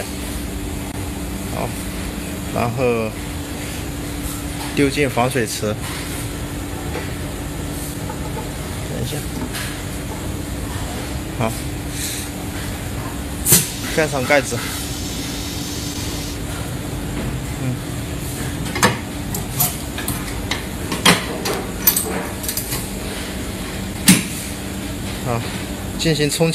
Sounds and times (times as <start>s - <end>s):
Speech: 1.5s - 1.8s, 2.6s - 3.2s, 4.7s - 5.8s, 8.9s - 9.4s, 11.4s - 11.6s, 13.9s - 14.7s, 25.2s - 26.5s.